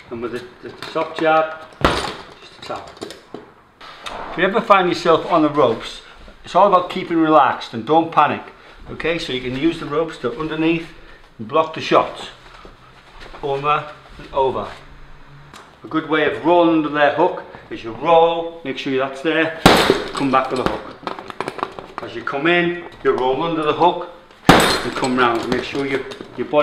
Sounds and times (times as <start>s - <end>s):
Gunshot, gunfire: 4.1s - 4.5s, 19.7s - 20.1s, 24.5s - 24.9s.